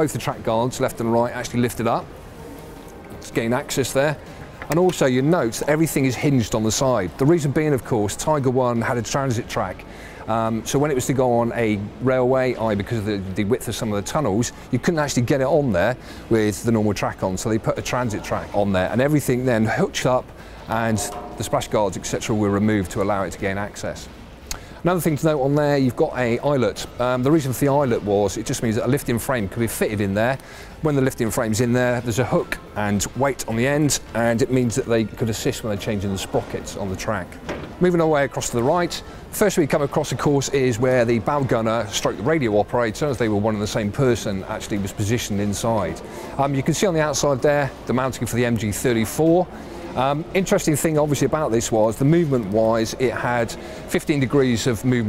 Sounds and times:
Speech: 0.0 - 2.1, 3.2 - 24.1, 24.8 - 55.0.

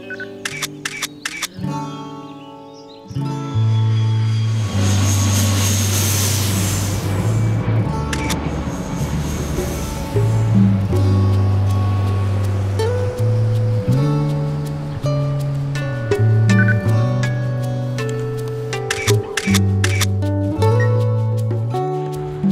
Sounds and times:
Music: 0.0 - 22.5
Single-lens reflex camera: 0.4 - 1.6, 8.1 - 8.4, 18.9 - 20.1.

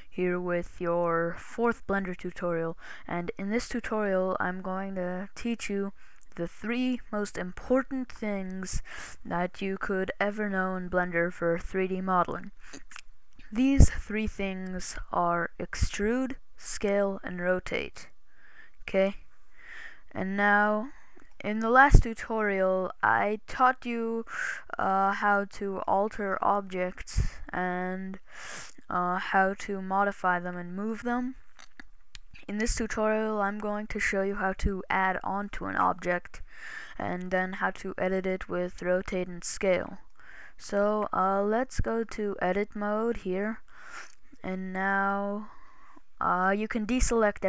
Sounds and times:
Speech: 0.2 - 18.1, 18.8 - 19.2, 20.1 - 28.2, 28.8 - 31.4, 32.4 - 36.4, 37.0 - 40.0, 40.6 - 43.6, 44.4 - 45.6, 46.2 - 47.4.

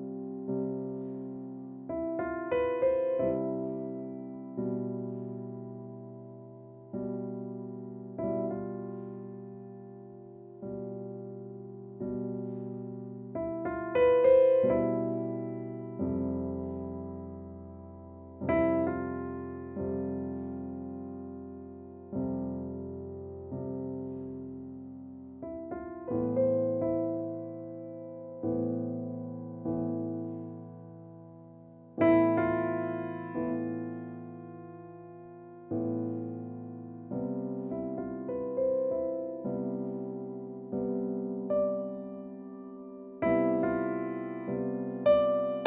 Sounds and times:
Electric piano: 0.0 - 45.6.

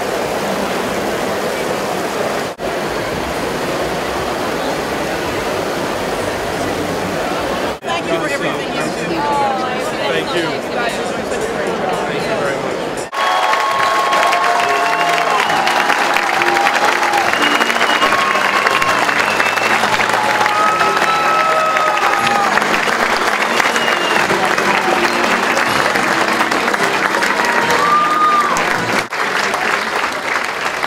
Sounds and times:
Music: 14.9 - 29.1.

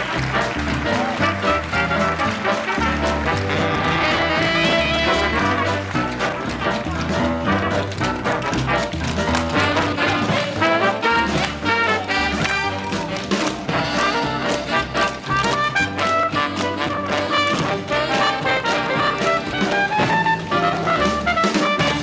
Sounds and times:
Music: 0.0 - 22.0.

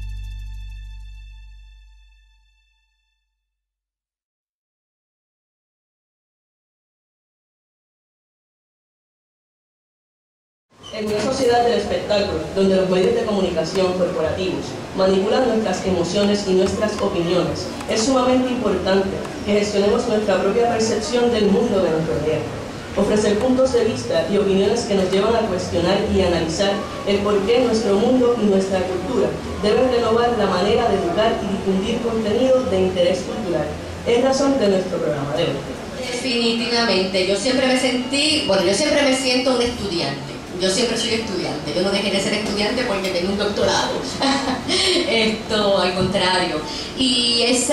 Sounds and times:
Speech: 10.8 - 47.7.

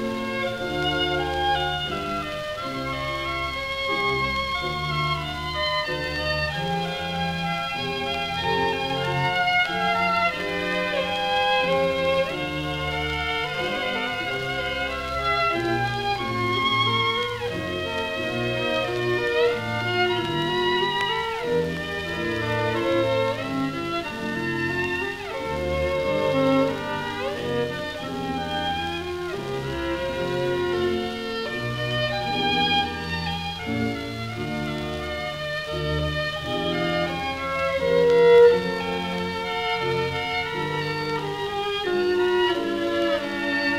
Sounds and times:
Violin, fiddle: 0.0 - 43.7.

